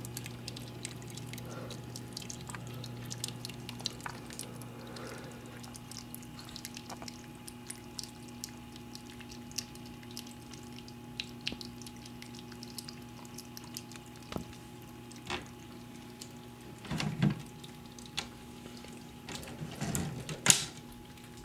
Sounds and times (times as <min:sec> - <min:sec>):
Water: 0:00.0 - 0:21.4.